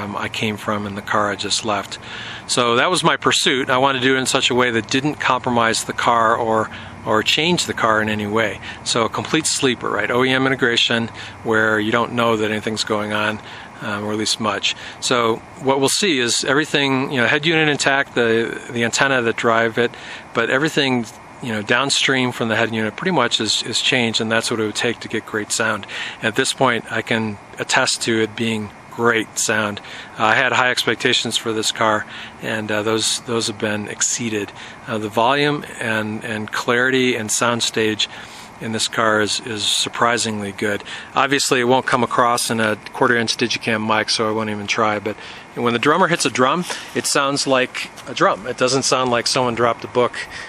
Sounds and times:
Speech: 0:00.0 - 0:50.4.

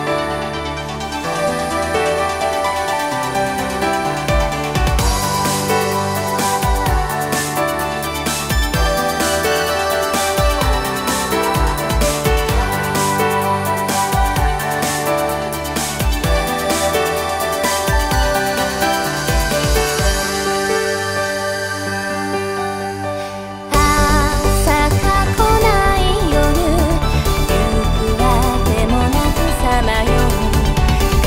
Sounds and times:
Jazz: 0:00.0 - 0:31.2.

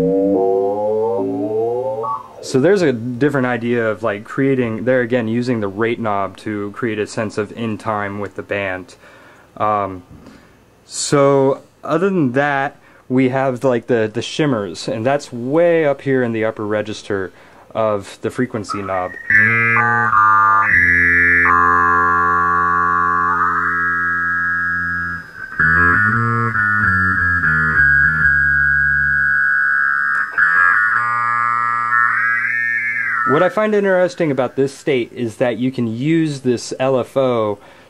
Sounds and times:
Effects unit: 0:00.0 - 0:02.8, 0:18.7 - 0:34.3
Guitar: 0:00.0 - 0:03.0, 0:18.6 - 0:34.6.

